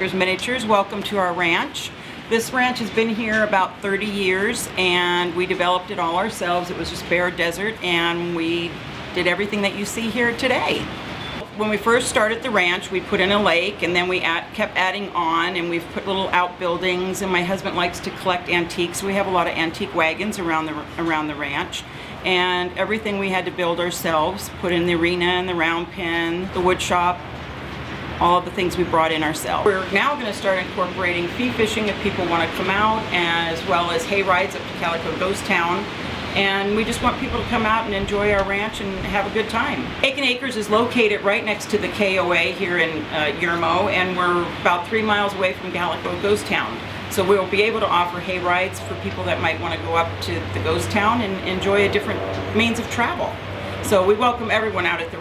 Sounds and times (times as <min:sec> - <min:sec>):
Speech: 0:00.0 - 0:27.2, 0:28.2 - 0:55.2.